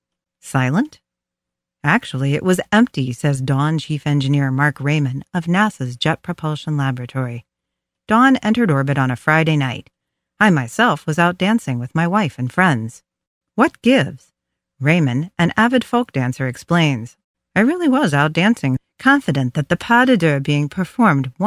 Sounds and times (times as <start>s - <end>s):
Speech: 0.4s - 1.0s, 1.9s - 7.4s, 8.1s - 13.0s, 13.6s - 14.2s, 14.8s - 21.4s.